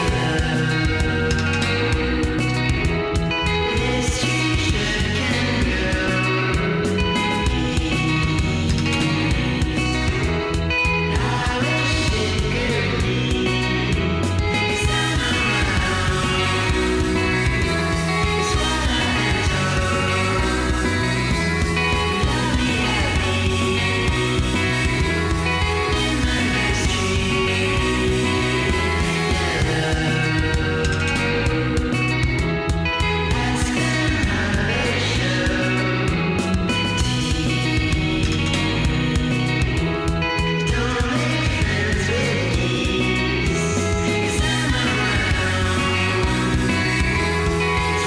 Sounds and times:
Music: 0:00.0 - 0:48.0.

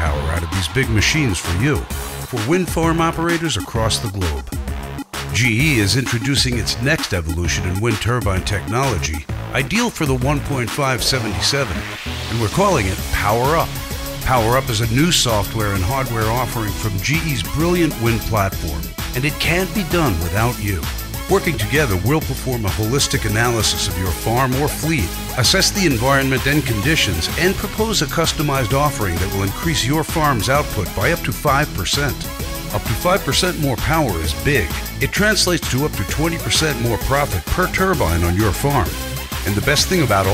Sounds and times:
Speech: 0:00.0 - 0:04.6, 0:05.3 - 0:40.3
Music: 0:00.0 - 0:40.3.

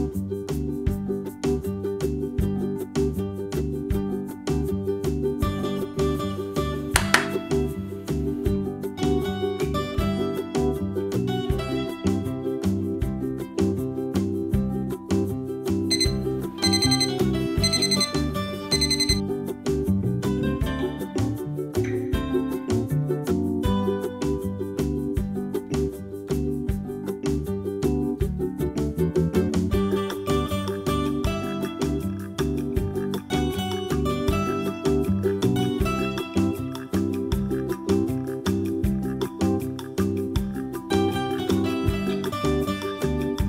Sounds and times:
Music: 0:00.0 - 0:43.4.

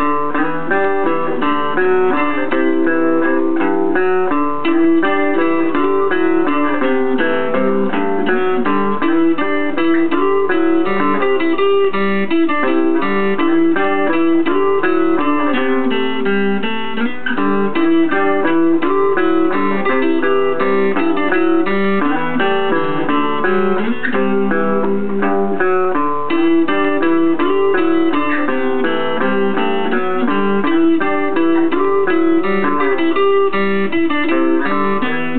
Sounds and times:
Music: 0:00.0 - 0:35.3.

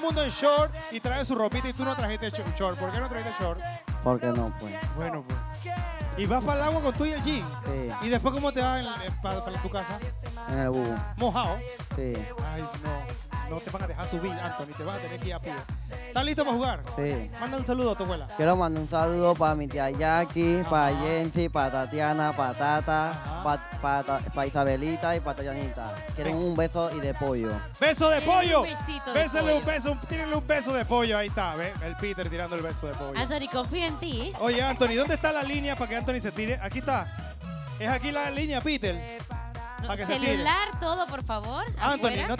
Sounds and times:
Music: 0:00.0 - 0:42.3
Speech: 0:00.1 - 0:05.2, 0:06.2 - 0:15.6, 0:16.2 - 0:36.9, 0:39.8 - 0:42.3.

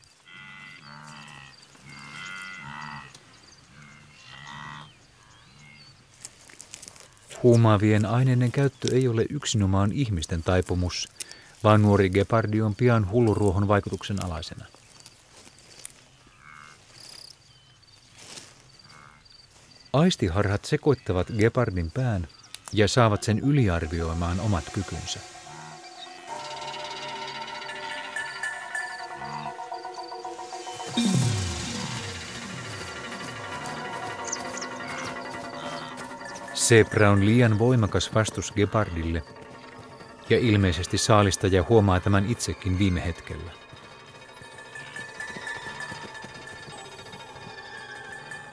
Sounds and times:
Speech: 0:07.4 - 0:14.7, 0:20.0 - 0:25.2, 0:36.6 - 0:39.3, 0:40.3 - 0:43.6.

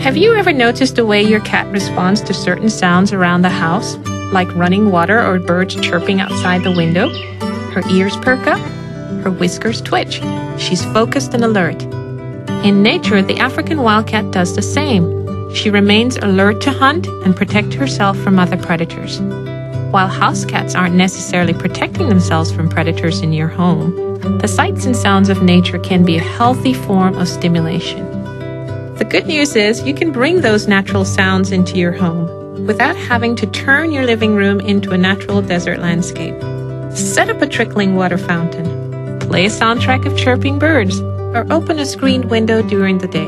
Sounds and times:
Speech: 0:00.0 - 0:11.9, 0:12.6 - 0:19.2, 0:19.9 - 0:28.2, 0:29.0 - 0:36.4, 0:37.0 - 0:43.2
Music: 0:00.0 - 0:43.2.

